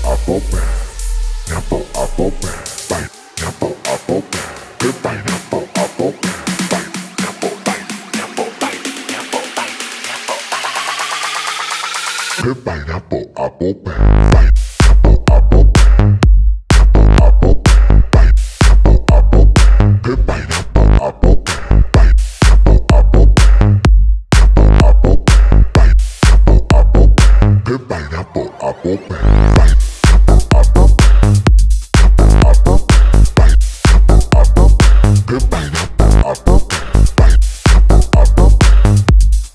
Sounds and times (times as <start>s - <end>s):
Music: 0.0s - 12.5s, 14.0s - 27.7s, 29.0s - 39.5s.